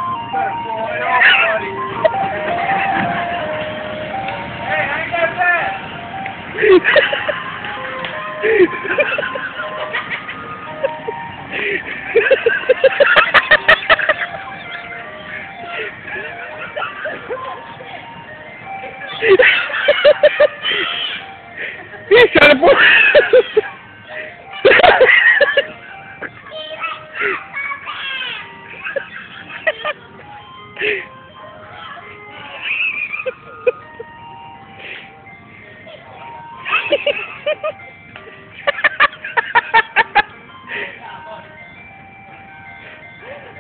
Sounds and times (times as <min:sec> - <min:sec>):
Ice cream truck, ice cream van: 0:00.0 - 0:43.6.